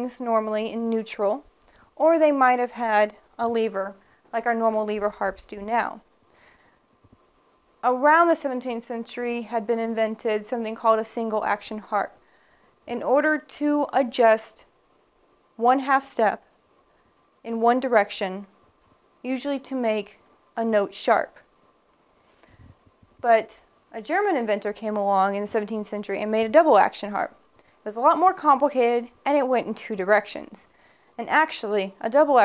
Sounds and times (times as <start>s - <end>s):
Speech: 0.0s - 1.4s, 2.0s - 6.0s, 7.8s - 12.2s, 12.9s - 14.7s, 15.6s - 16.4s, 17.5s - 18.5s, 19.3s - 21.4s, 23.2s - 32.4s.